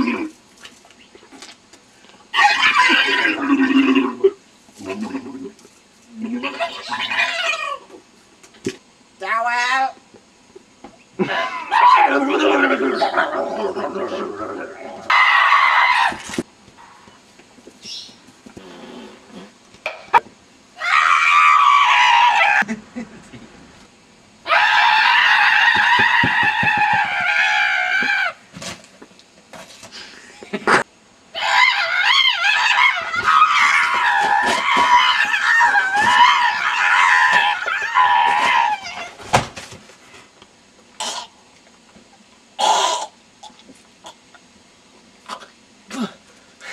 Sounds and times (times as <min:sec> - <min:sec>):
Screaming: 0:02.3 - 0:04.1, 0:06.2 - 0:07.9, 0:11.2 - 0:16.4, 0:20.8 - 0:22.7, 0:24.4 - 0:28.4, 0:31.3 - 0:39.2.